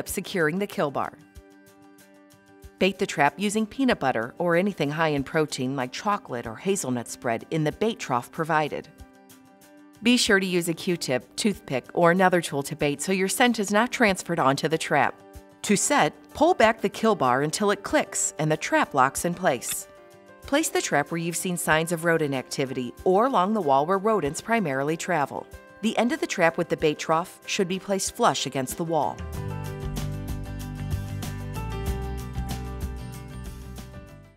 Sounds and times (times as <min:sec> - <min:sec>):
Speech: 0:00.0 - 0:01.2, 0:02.8 - 0:08.9, 0:10.0 - 0:19.8, 0:20.5 - 0:29.2
Music: 0:00.0 - 0:34.3.